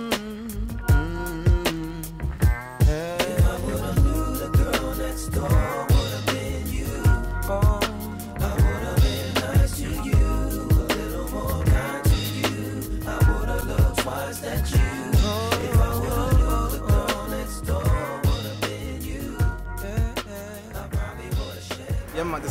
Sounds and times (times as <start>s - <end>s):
Tender music: 0.0s - 22.5s.